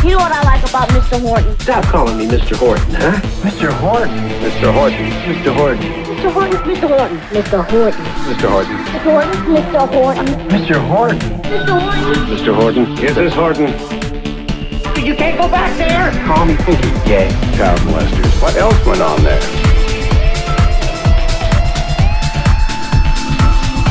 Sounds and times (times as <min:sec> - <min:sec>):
Speech: 0:00.0 - 0:13.8, 0:15.0 - 0:19.5
Music: 0:00.0 - 0:23.9.